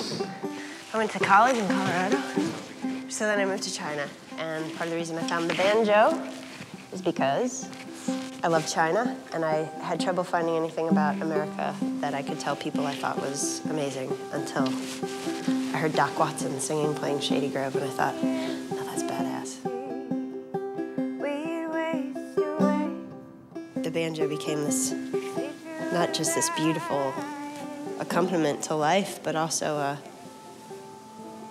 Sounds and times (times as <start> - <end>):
Music: 0.0 - 31.5
Speech: 23.9 - 25.0, 28.0 - 30.0.